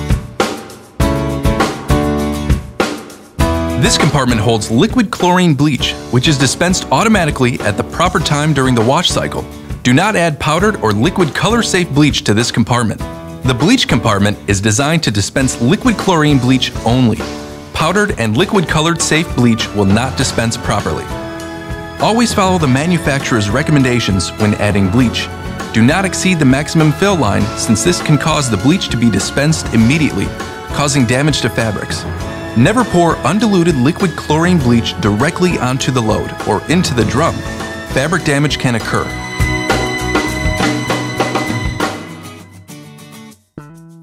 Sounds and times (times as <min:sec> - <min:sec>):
Music: 0:00.0 - 0:44.0
Speech: 0:03.8 - 0:21.2, 0:22.0 - 0:32.0, 0:32.6 - 0:39.2.